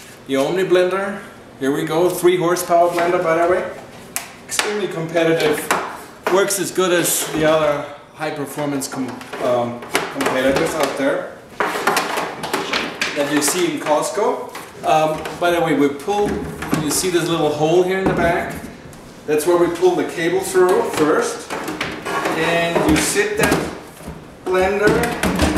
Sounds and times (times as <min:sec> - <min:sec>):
Speech: 0:00.3 - 0:03.8, 0:04.5 - 0:11.4, 0:13.2 - 0:18.7, 0:19.3 - 0:21.5, 0:22.3 - 0:23.8, 0:24.4 - 0:25.5.